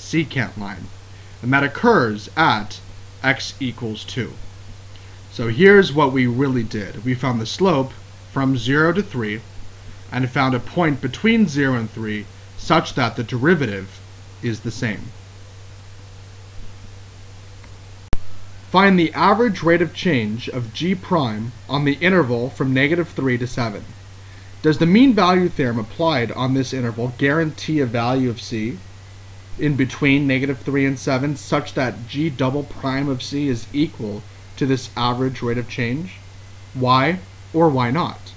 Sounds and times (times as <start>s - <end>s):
Narration, monologue: 0.0s - 38.3s.